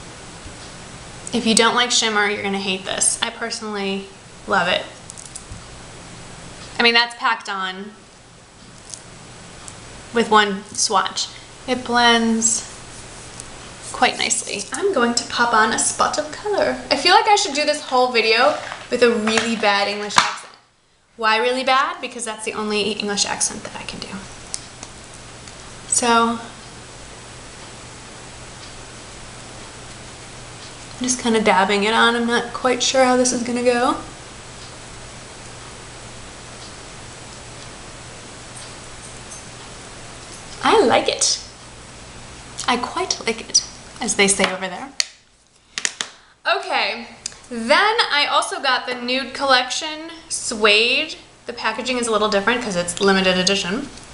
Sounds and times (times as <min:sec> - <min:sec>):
Speech: 0:01.3 - 0:05.0, 0:06.8 - 0:08.0, 0:10.2 - 0:12.7, 0:14.0 - 0:20.5, 0:21.2 - 0:24.3, 0:25.9 - 0:26.6, 0:31.0 - 0:34.1, 0:40.6 - 0:41.5, 0:42.6 - 0:45.0, 0:46.5 - 0:54.0.